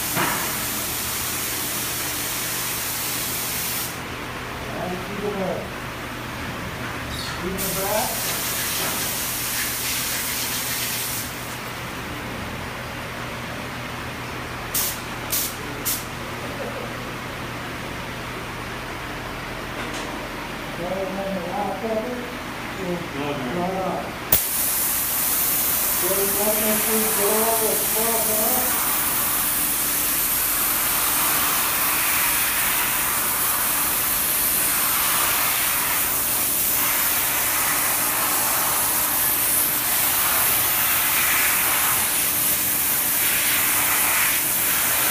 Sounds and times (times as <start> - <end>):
Spray: 0.0 - 4.0, 7.6 - 11.6, 14.7 - 16.1, 24.4 - 45.1
Speech: 4.7 - 5.8, 7.1 - 8.3, 20.8 - 24.2, 26.0 - 28.8.